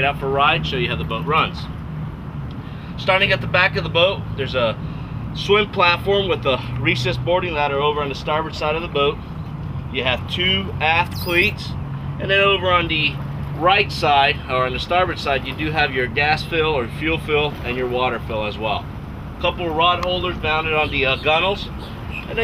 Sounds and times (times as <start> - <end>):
Speech: 0.0 - 1.7, 3.0 - 4.8, 5.4 - 9.2, 10.0 - 18.8, 19.4 - 21.7.